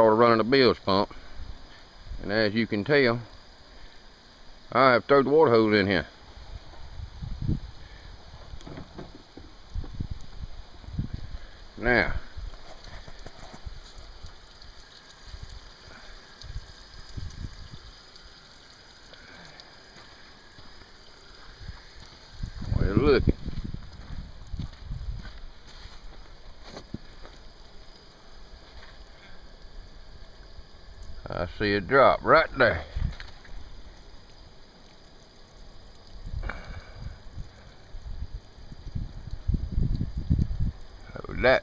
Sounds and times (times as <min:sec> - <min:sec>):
Speech: 0:00.0 - 0:01.1, 0:02.2 - 0:03.3, 0:04.7 - 0:06.1, 0:11.8 - 0:12.3, 0:22.7 - 0:23.3, 0:31.2 - 0:32.9, 0:41.1 - 0:41.6.